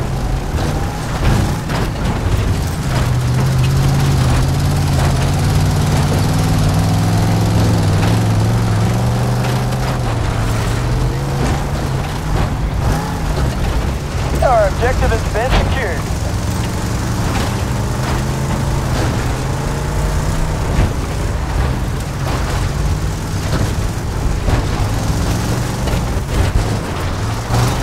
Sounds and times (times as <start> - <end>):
Speech: 14.4 - 16.0.